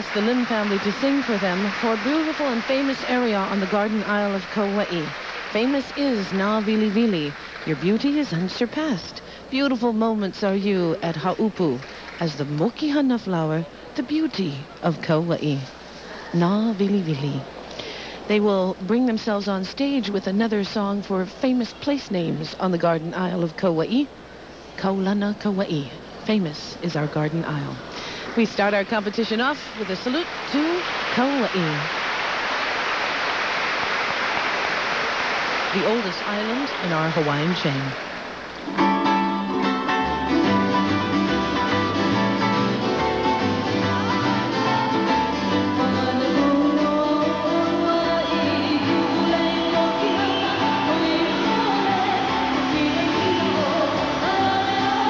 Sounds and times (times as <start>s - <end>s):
Flamenco: 38.6s - 55.1s.